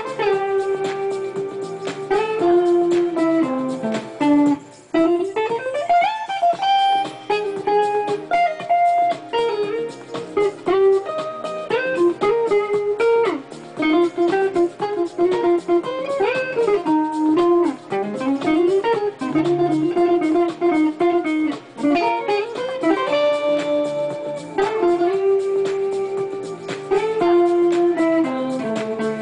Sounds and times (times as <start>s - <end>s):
Acoustic guitar: 0.0s - 29.2s
Strum: 0.0s - 29.2s.